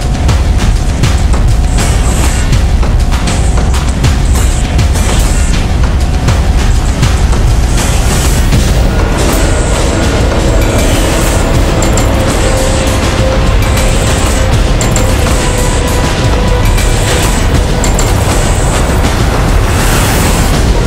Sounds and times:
Music: 0.0 - 20.8.

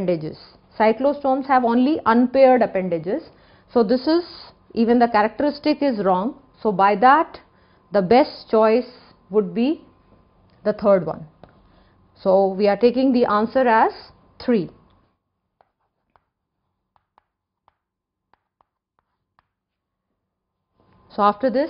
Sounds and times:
Speech: 0.0 - 7.4, 10.6 - 11.3, 12.2 - 14.8, 21.1 - 21.6
Inside, small room: 0.0 - 21.6.

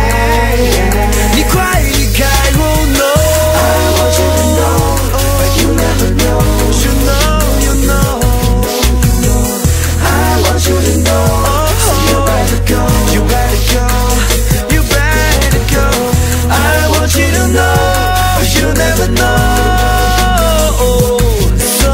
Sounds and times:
Pop music: 0.0 - 21.9.

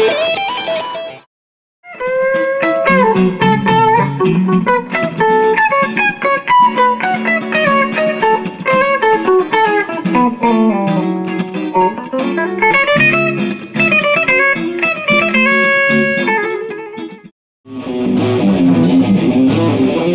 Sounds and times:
Electric guitar: 0.0 - 1.3, 1.9 - 20.1
Bass guitar: 1.9 - 20.1
Strum: 2.0 - 16.3, 17.1 - 20.1.

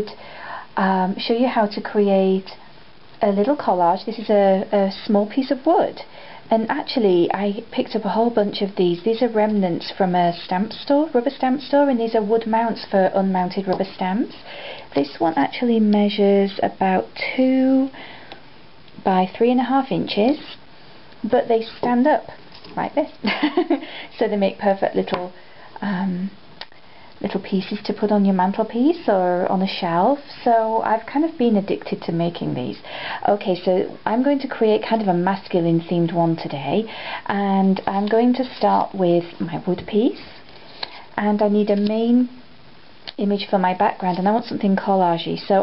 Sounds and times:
Speech: 0.0 - 0.2, 0.8 - 2.6, 3.2 - 18.0, 19.0 - 20.6, 21.2 - 23.2, 24.2 - 26.4, 27.2 - 40.3, 41.2 - 42.4, 43.1 - 45.6.

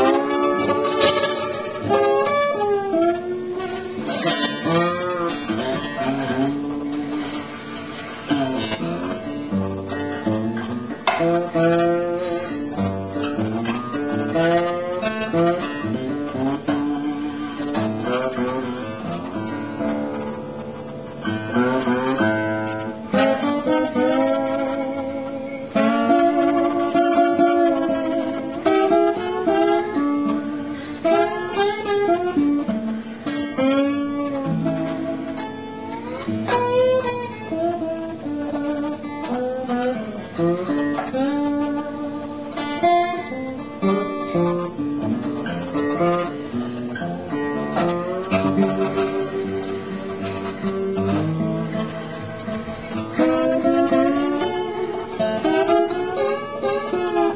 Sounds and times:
Strum: 0.0 - 57.3.

